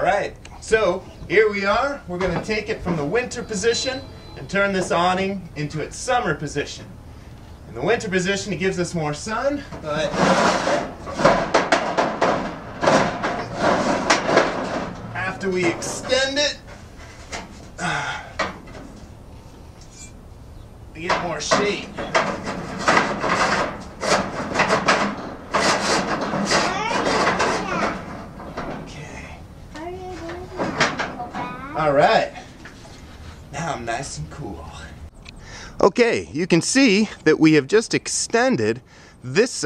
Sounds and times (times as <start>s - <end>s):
Outside, urban or manmade: 0.0s - 39.6s.